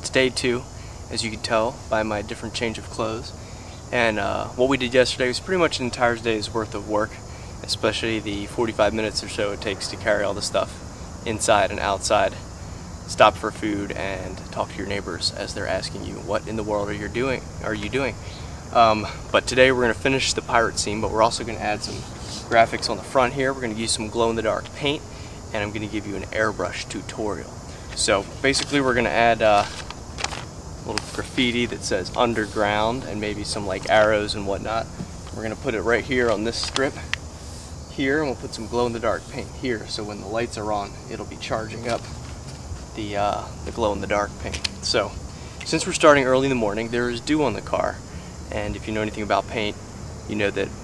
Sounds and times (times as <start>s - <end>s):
Speech: 0.0s - 12.5s, 13.1s - 29.8s, 30.9s - 37.2s, 37.9s - 42.1s, 43.0s - 50.8s.